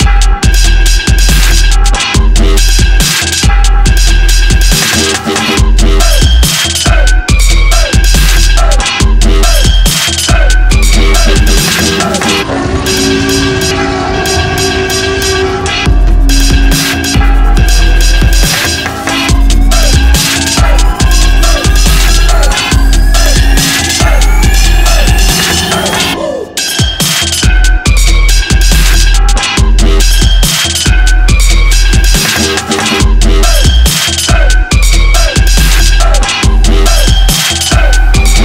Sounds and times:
Drum and bass: 0:00.0 - 0:38.4.

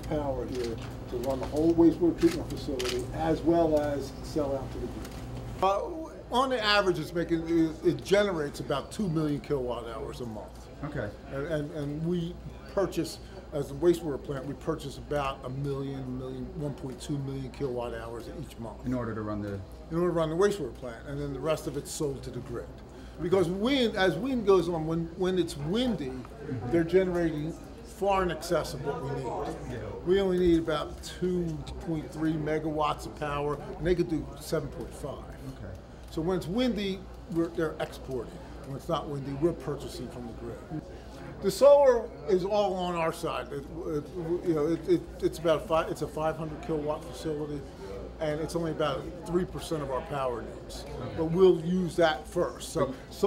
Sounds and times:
Speech: 0:00.0 - 0:05.0, 0:05.6 - 0:53.2.

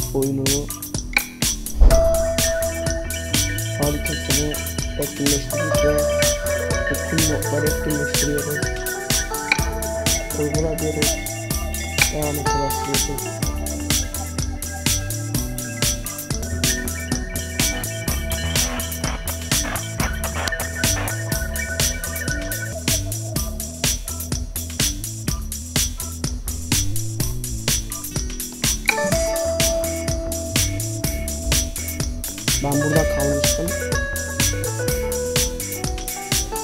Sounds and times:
Music: 0:00.0 - 0:36.6.

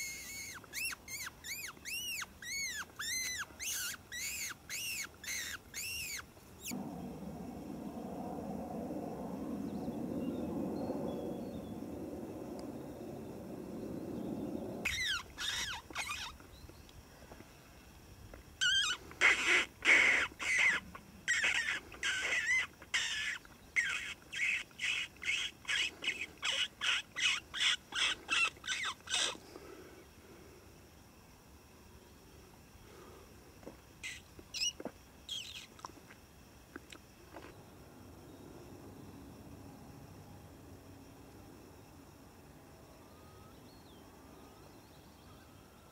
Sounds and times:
Wild animals: 0:06.6 - 0:16.4.

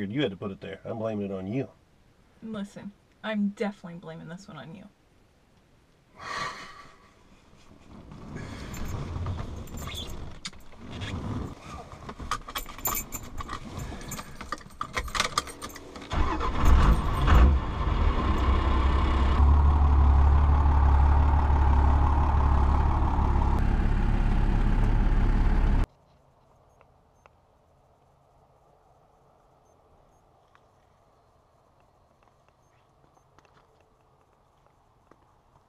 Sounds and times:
Car: 0:07.9 - 0:25.9.

